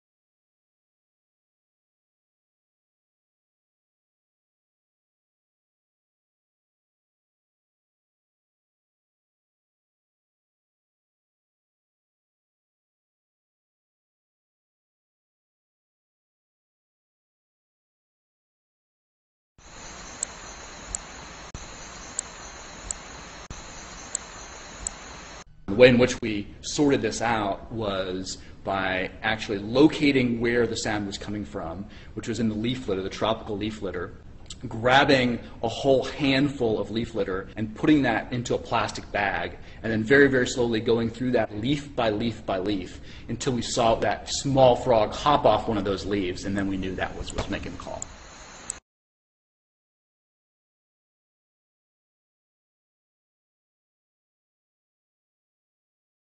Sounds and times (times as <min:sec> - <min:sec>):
Speech: 0:25.7 - 0:48.1.